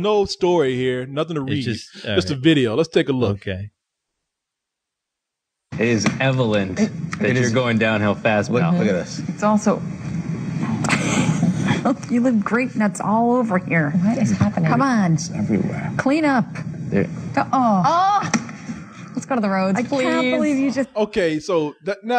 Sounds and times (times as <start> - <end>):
Speech: 0.0 - 3.7, 5.8 - 9.8, 11.8 - 18.2, 19.2 - 22.1.